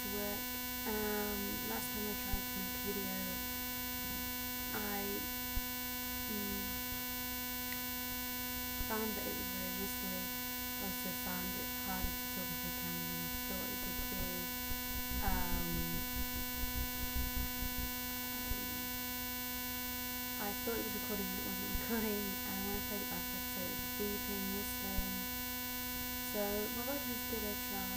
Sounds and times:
Speech: 0:00.0 - 0:03.4, 0:04.8 - 0:05.3, 0:06.3 - 0:06.7, 0:08.9 - 0:14.5, 0:15.2 - 0:16.0, 0:20.4 - 0:25.2, 0:26.3 - 0:27.9.

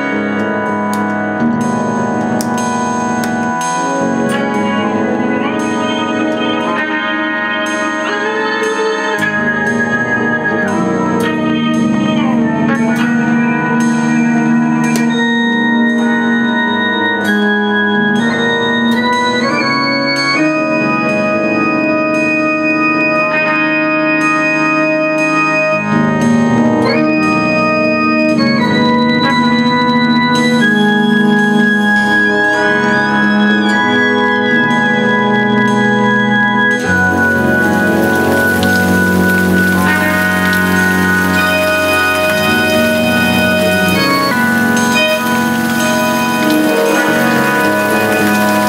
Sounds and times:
Guitar: 0:00.0 - 0:48.6
Organ: 0:00.0 - 0:48.6.

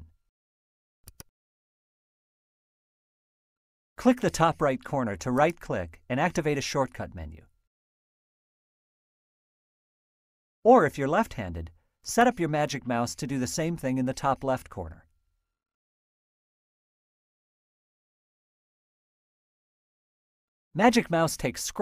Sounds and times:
Speech: 0:04.0 - 0:07.5, 0:10.7 - 0:15.0, 0:20.8 - 0:21.8.

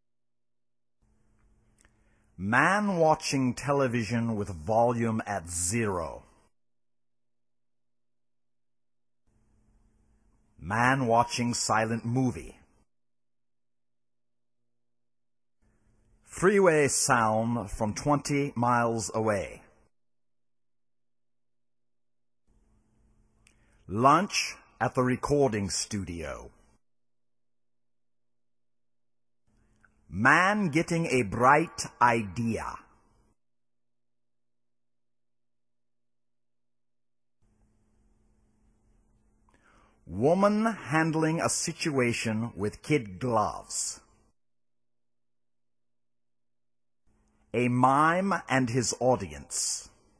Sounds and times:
Speech: 0:02.4 - 0:06.4, 0:10.6 - 0:12.7, 0:16.3 - 0:19.8, 0:23.9 - 0:26.6, 0:30.1 - 0:33.0, 0:40.1 - 0:44.1, 0:47.6 - 0:50.0.

